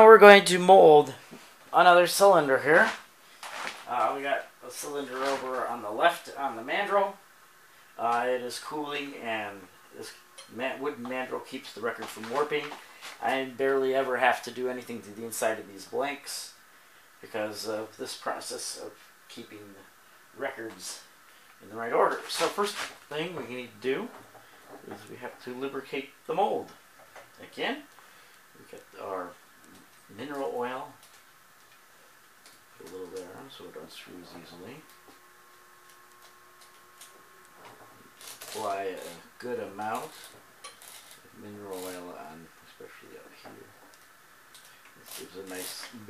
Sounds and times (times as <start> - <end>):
Speech: 0.0 - 3.0, 3.9 - 7.2, 8.0 - 16.6, 17.2 - 24.2, 24.8 - 26.8, 27.4 - 27.9, 28.6 - 29.4, 30.1 - 31.0, 32.8 - 34.9, 38.5 - 40.3, 41.3 - 43.8, 45.0 - 46.1.